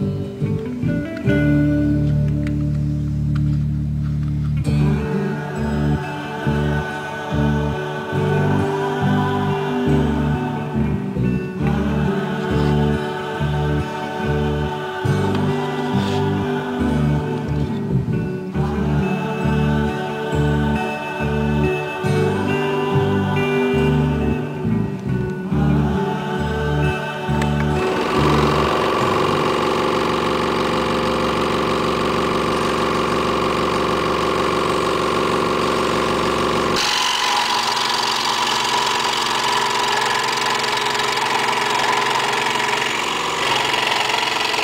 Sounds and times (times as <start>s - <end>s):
Sawing: 36.8s - 44.6s.